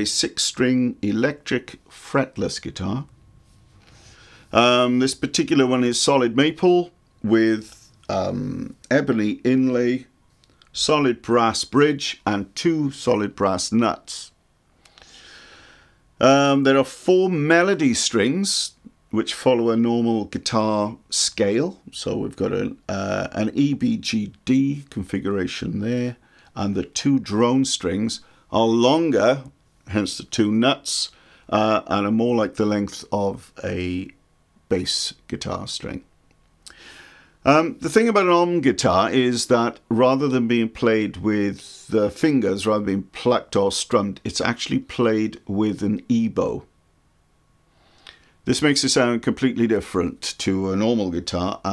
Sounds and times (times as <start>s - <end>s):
Speech: 0.0s - 3.1s, 4.5s - 10.1s, 10.7s - 14.4s, 16.2s - 36.1s, 37.4s - 46.7s, 48.4s - 51.7s.